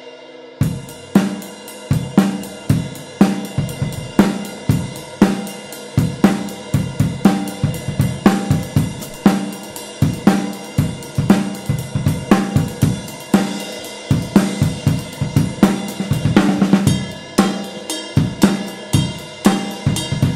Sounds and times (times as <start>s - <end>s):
Drum kit: 0.0s - 20.3s
Bass drum: 2.0s - 13.5s, 14.1s - 17.4s, 18.2s - 20.3s.